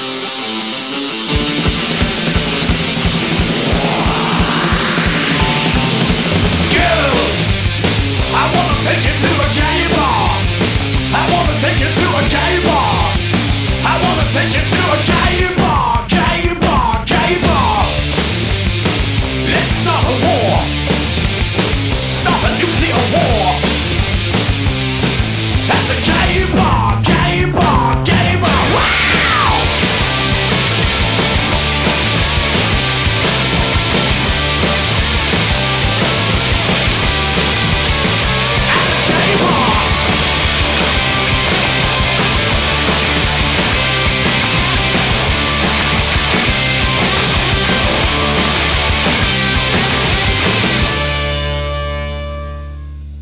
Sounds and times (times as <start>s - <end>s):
Guitar: 0.0s - 53.2s.